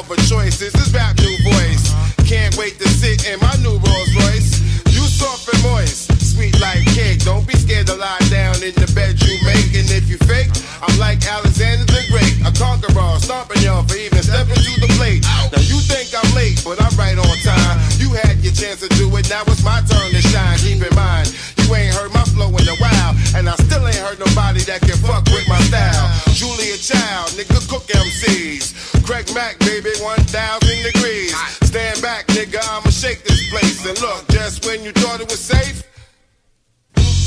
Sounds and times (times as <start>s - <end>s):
Music: 0.0s - 37.2s.